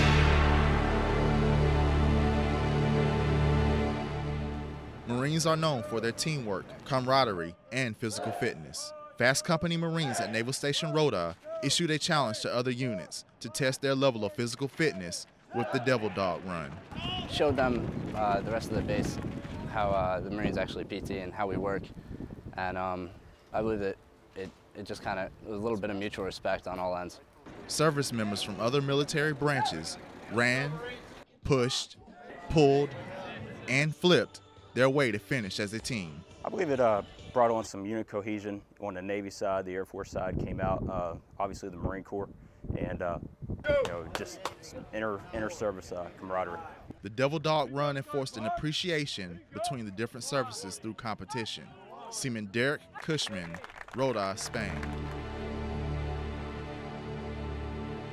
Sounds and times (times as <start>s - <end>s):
Music: 0.0s - 5.6s, 32.9s - 38.0s, 54.1s - 58.1s
Speech: 5.1s - 21.8s, 22.6s - 54.8s.